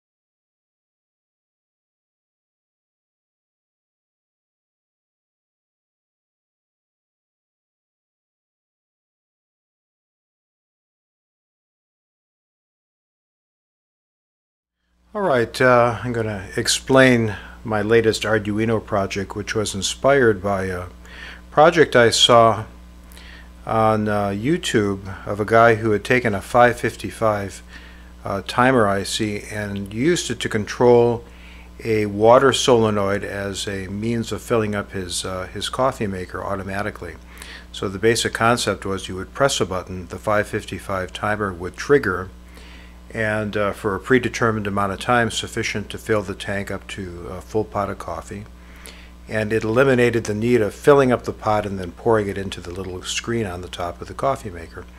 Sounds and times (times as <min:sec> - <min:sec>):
Speech: 0:15.1 - 0:22.8, 0:23.6 - 0:42.4, 0:43.1 - 0:48.5, 0:49.3 - 0:54.9.